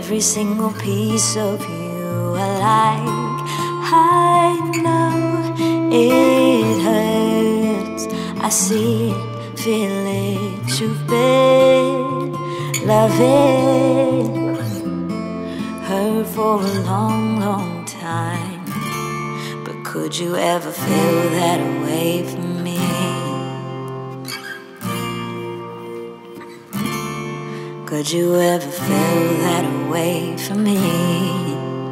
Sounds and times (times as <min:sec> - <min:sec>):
Music: 0:00.0 - 0:31.9.